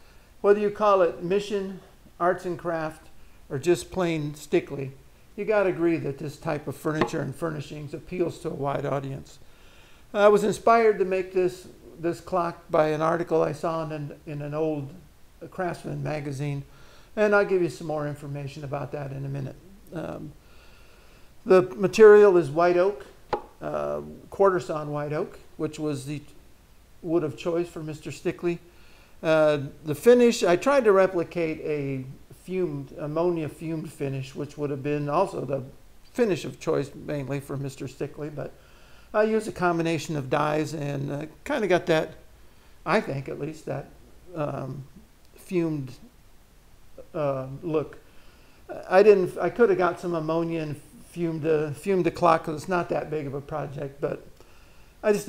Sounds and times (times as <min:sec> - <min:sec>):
Speech: 0:00.4 - 0:09.4, 0:10.1 - 0:20.4, 0:21.4 - 0:26.4, 0:27.0 - 0:42.2, 0:42.8 - 0:46.1, 0:47.0 - 0:48.0, 0:48.7 - 0:54.3, 0:55.0 - 0:55.2.